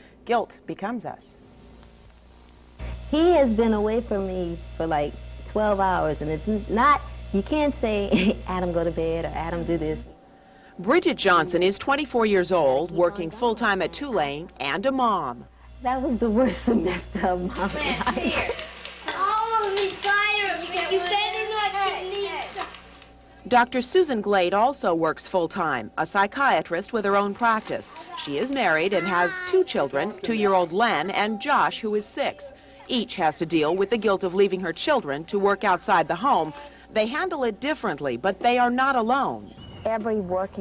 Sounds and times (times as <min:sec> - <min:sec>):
Speech: 0:03.1 - 0:10.0, 0:10.8 - 0:18.4.